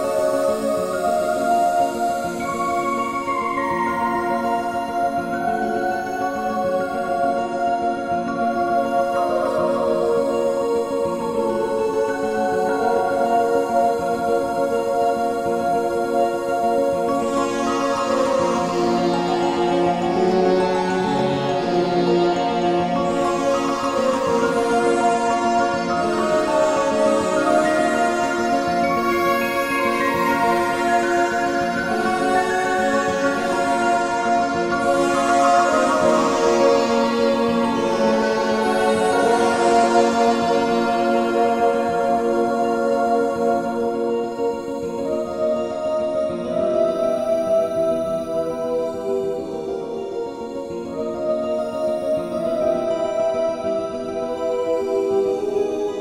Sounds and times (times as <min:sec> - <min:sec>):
Ambient music: 0:00.0 - 0:56.0.